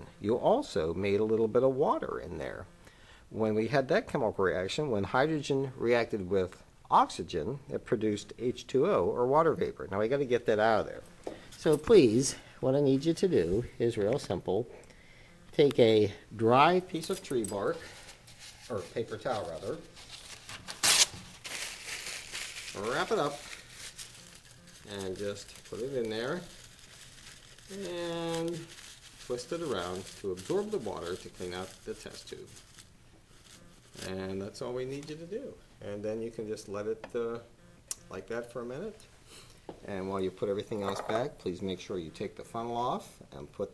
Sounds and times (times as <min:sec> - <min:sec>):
Speech: 0:00.0 - 0:02.7, 0:03.3 - 0:11.0, 0:11.6 - 0:14.7, 0:15.5 - 0:17.8, 0:18.7 - 0:19.9, 0:22.8 - 0:23.4, 0:24.9 - 0:26.5, 0:27.7 - 0:28.7, 0:29.3 - 0:32.5, 0:34.0 - 0:37.5, 0:38.1 - 0:39.1, 0:39.8 - 0:43.7.